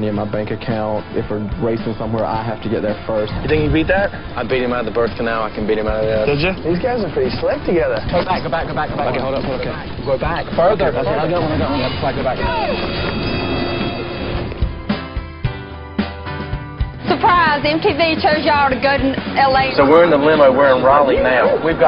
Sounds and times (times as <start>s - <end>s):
Music: 0.0s - 21.8s.